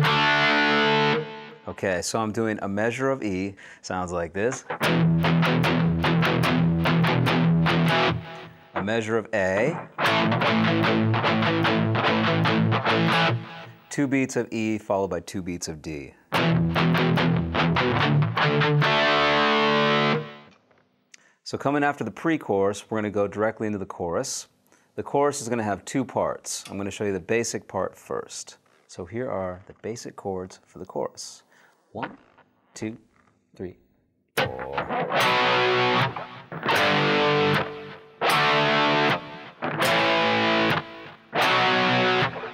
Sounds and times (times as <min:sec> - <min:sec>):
Guitar: 0:00.0 - 0:03.2, 0:04.0 - 0:14.4, 0:16.3 - 0:20.8, 0:34.4 - 0:42.5
Speech: 0:01.7 - 0:04.7, 0:08.8 - 0:09.8, 0:13.9 - 0:16.2, 0:21.4 - 0:32.2, 0:32.8 - 0:33.8, 0:34.4 - 0:34.9.